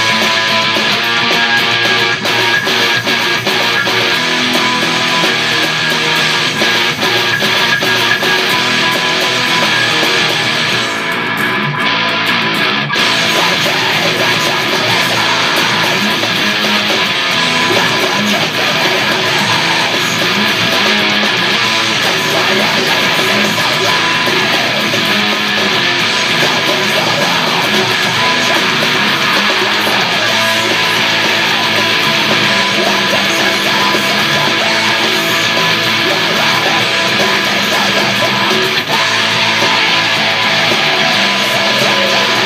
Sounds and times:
Electric guitar: 0.0s - 42.4s.

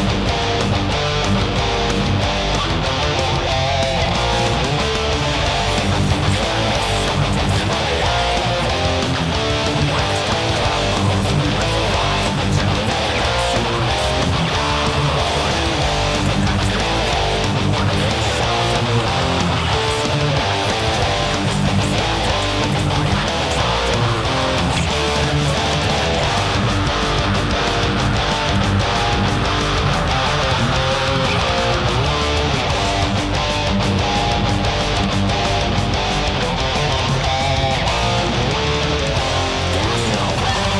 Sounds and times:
Guitar: 0.0s - 40.8s.

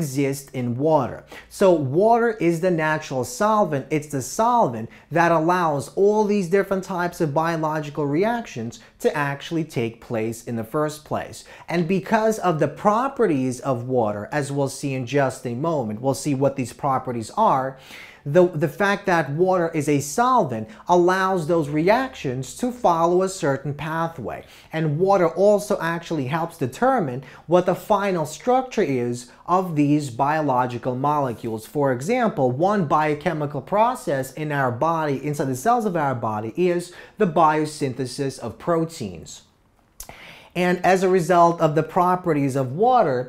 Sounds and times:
Speech: 0.0s - 39.5s, 40.5s - 43.2s.

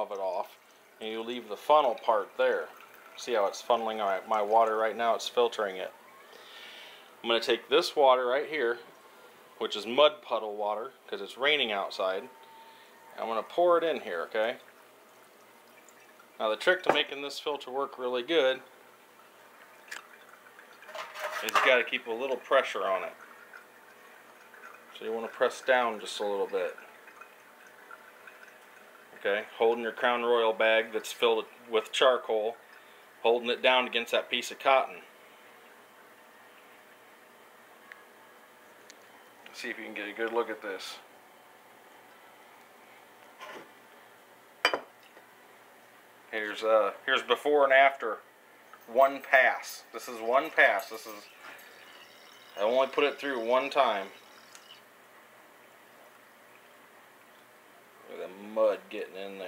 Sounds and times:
Speech: 0.0s - 6.0s, 7.2s - 8.9s, 9.6s - 12.4s, 13.2s - 14.6s, 16.4s - 18.7s, 21.4s - 23.2s, 25.0s - 26.8s, 29.2s - 32.6s, 33.2s - 35.1s, 39.5s - 41.1s, 46.3s - 48.2s, 48.9s - 51.3s, 52.6s - 54.2s, 58.0s - 59.4s
Water: 0.0s - 59.4s.

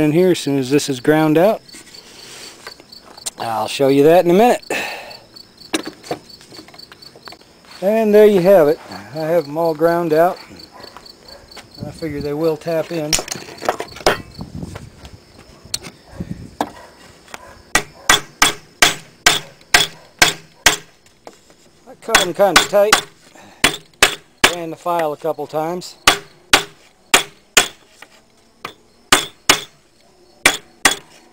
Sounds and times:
Speech: 3.3s - 4.6s, 7.8s - 10.4s, 11.8s - 13.3s, 21.9s - 22.9s, 24.5s - 26.0s.

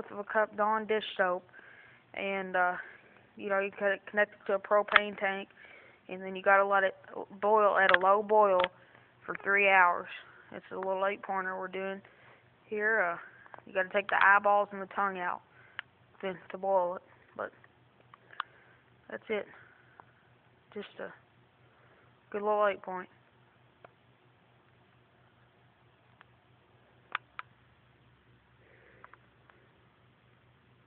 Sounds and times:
Speech: 0.0s - 1.5s, 2.2s - 5.5s, 6.1s - 8.7s, 9.3s - 12.0s, 12.7s - 15.4s, 16.2s - 17.6s, 19.1s - 19.6s, 20.7s - 21.2s, 22.3s - 23.2s.

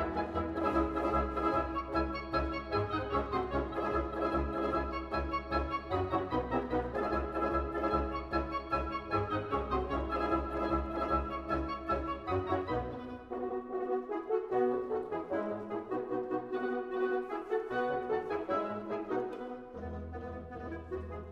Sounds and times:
Music: 0.0s - 21.3s.

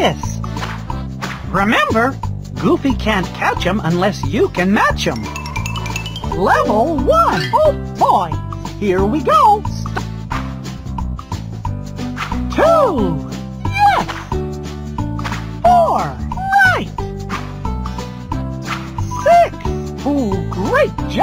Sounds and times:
Speech: 0.0s - 0.4s, 1.5s - 5.2s, 6.3s - 9.8s, 12.5s - 14.1s, 15.6s - 17.0s, 19.1s - 21.2s
Music: 0.0s - 21.2s.

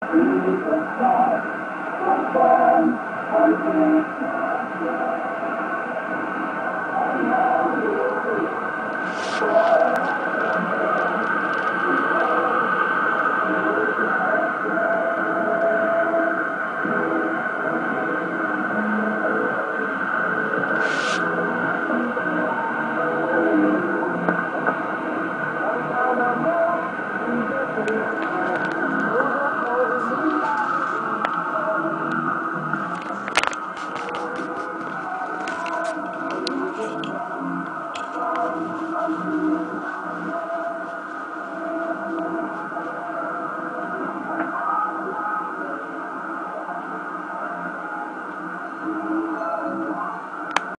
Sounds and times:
Radio: 0.0s - 50.7s.

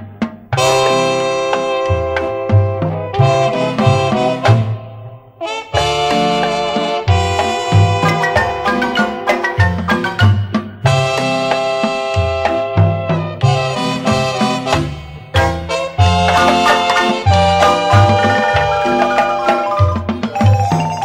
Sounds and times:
Swing music: 0.0s - 21.0s
Marimba, xylophone: 5.7s - 21.0s.

